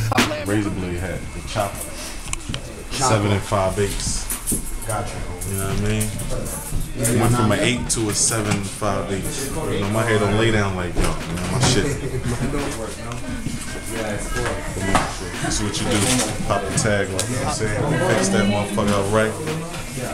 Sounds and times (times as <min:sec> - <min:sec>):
Music: 0:01.8 - 0:20.1.